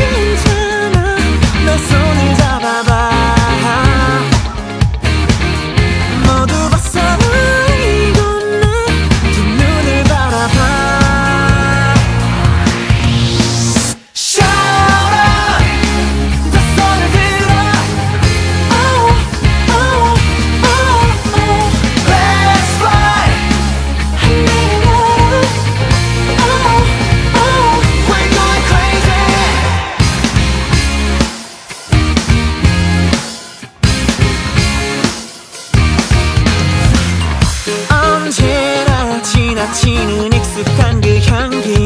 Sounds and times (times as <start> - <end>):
Pop music: 0.0 - 41.8.